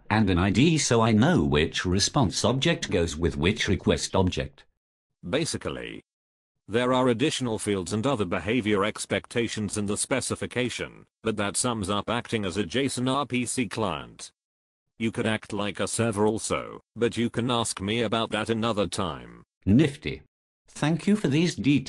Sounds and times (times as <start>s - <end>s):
Narration, monologue: 0.0s - 21.8s.